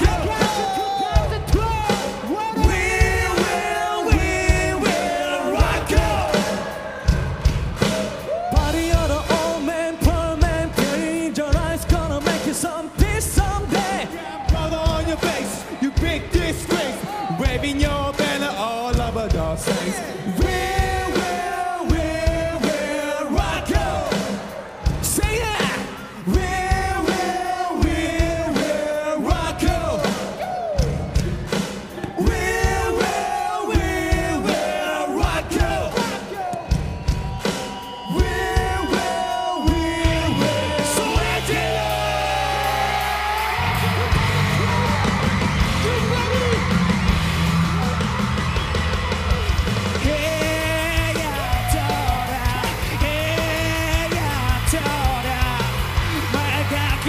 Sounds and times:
Progressive rock: 0.0 - 57.0.

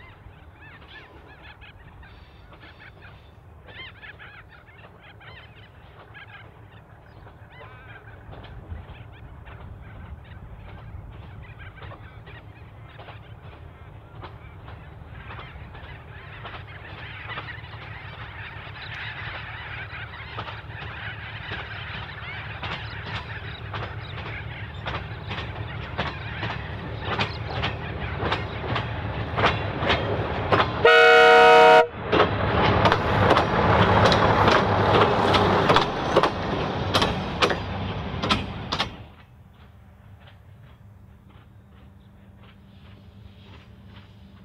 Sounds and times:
Railroad car, train wagon: 0.0 - 44.4
Vehicle horn, car horn, honking: 30.8 - 31.9
Train horn: 30.8 - 32.0
Train whistle: 30.8 - 32.0.

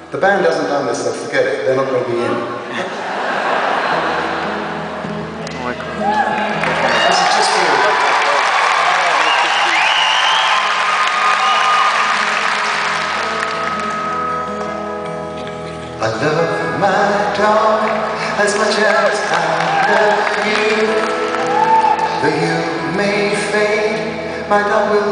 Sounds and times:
Music: 3.9 - 25.1.

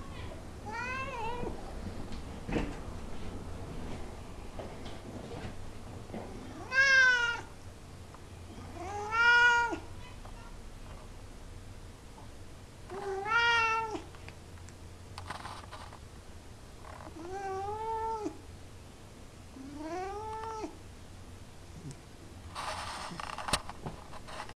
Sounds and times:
Cat: 0.2 - 1.6, 6.3 - 7.5, 8.5 - 10.5, 12.9 - 14.2, 17.1 - 18.4, 19.6 - 20.8.

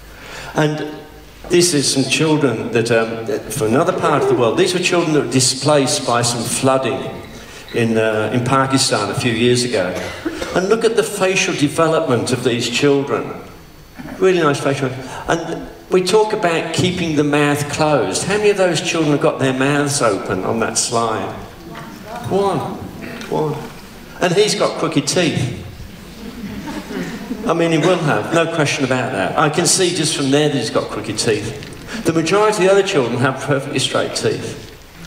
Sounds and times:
Male speech, man speaking: 0.6 - 10.0, 10.6 - 13.5, 14.2 - 21.5, 22.1 - 25.7, 27.5 - 34.7.

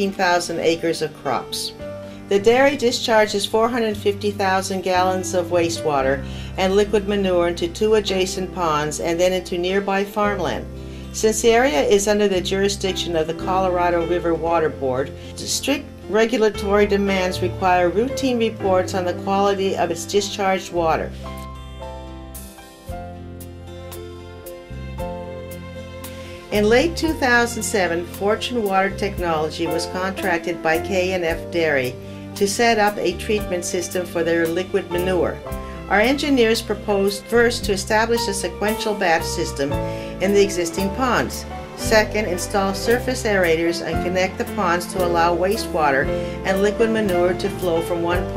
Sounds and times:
Speech: 0.0 - 1.7, 2.3 - 10.6, 11.2 - 21.1, 26.5 - 48.3
Music: 0.0 - 48.3.

